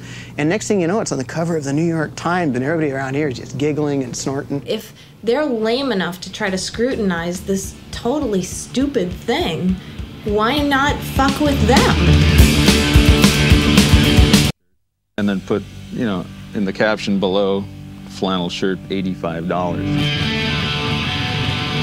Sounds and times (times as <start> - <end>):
Speech: 0.4 - 12.1, 15.2 - 19.9
Music: 6.4 - 14.6, 15.2 - 21.8.